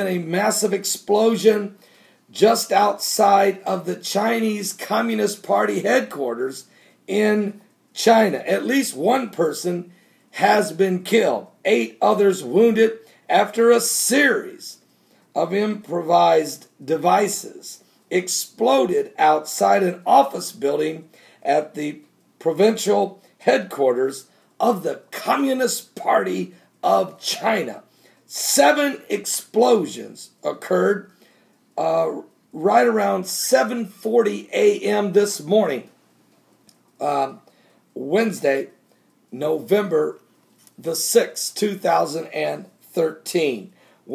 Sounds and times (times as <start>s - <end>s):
Speech: 0.0s - 14.8s, 15.4s - 31.1s, 31.8s - 35.9s, 37.0s - 37.4s, 38.0s - 44.1s.